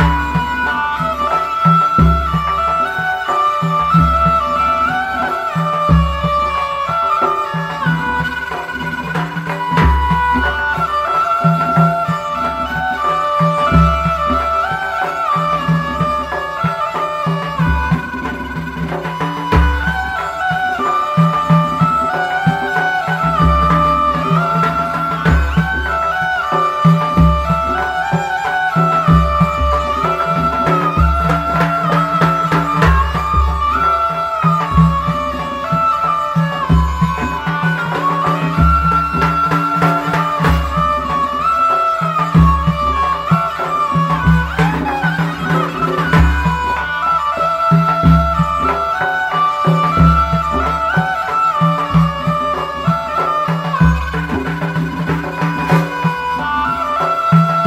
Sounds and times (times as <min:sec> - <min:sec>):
Folk music: 0:00.0 - 0:57.6.